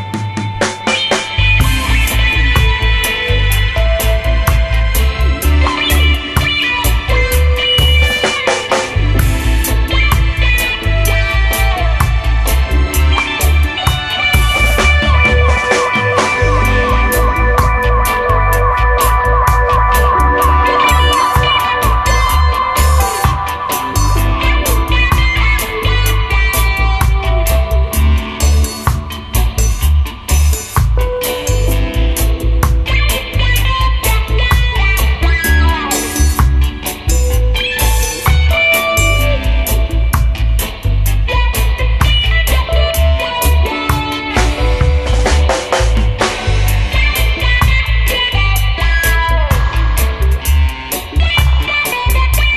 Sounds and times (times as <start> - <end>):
Music: 0.0 - 52.5.